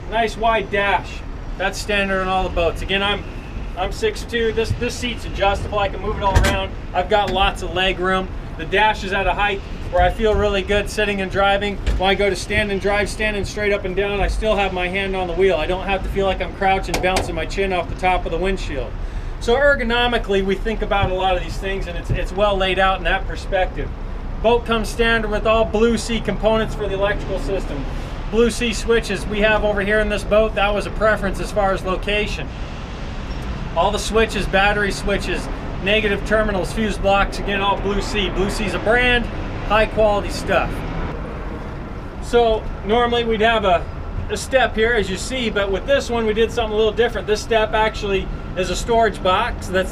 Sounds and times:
Speech: 0:00.0 - 0:03.2, 0:03.8 - 0:32.5, 0:33.8 - 0:40.8, 0:42.2 - 0:49.9.

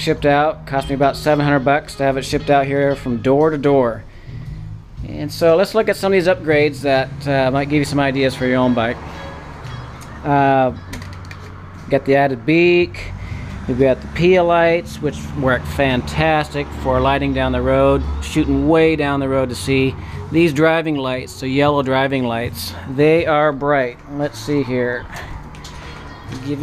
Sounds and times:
Motor vehicle (road): 0:00.0 - 0:26.6
Music: 0:00.0 - 0:26.6
Speech: 0:05.0 - 0:09.0, 0:13.8 - 0:25.1, 0:26.3 - 0:26.6.

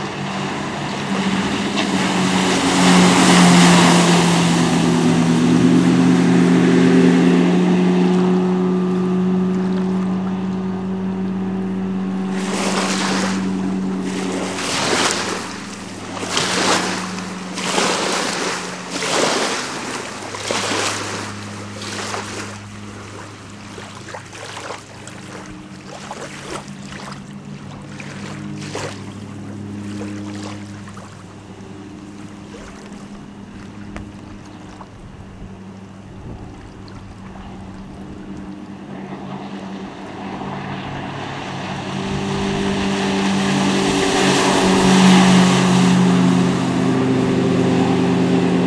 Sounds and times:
Stream: 0:00.0 - 0:48.6.

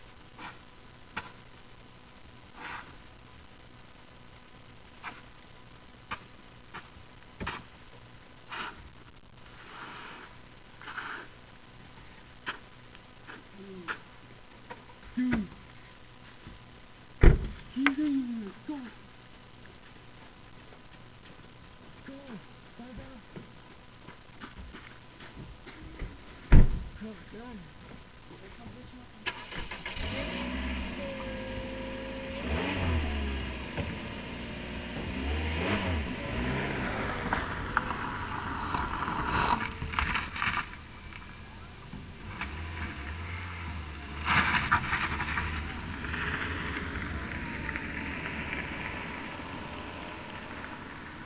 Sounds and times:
Speech: 0:13.5 - 0:14.0, 0:15.2 - 0:15.6, 0:17.7 - 0:19.0, 0:22.0 - 0:23.3, 0:27.0 - 0:29.3
Car: 0:29.2 - 0:51.2.

